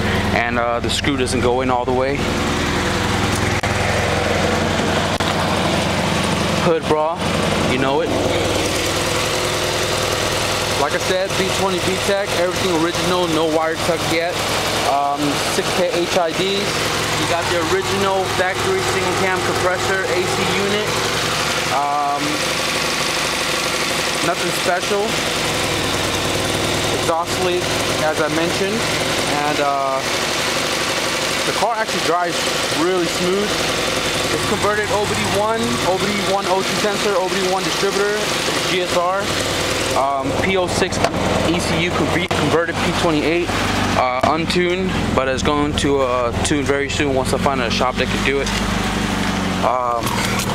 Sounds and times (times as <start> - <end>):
Speech: 0.0 - 2.3, 6.6 - 8.2, 10.8 - 21.0, 21.7 - 22.4, 24.2 - 25.2, 26.9 - 30.1, 31.5 - 33.6, 34.3 - 39.3, 40.0 - 48.6, 49.6 - 50.1
Car: 0.0 - 50.5
Engine: 0.0 - 50.5
Vibration: 0.0 - 50.5.